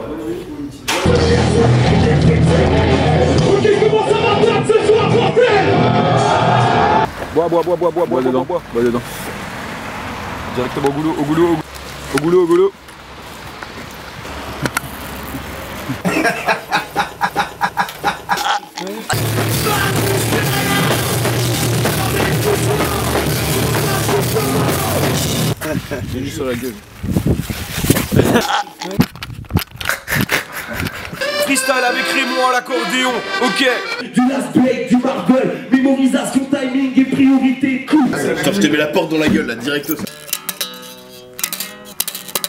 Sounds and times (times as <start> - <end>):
Music: 1.0 - 7.0, 19.2 - 25.6, 31.2 - 34.0, 40.0 - 42.4.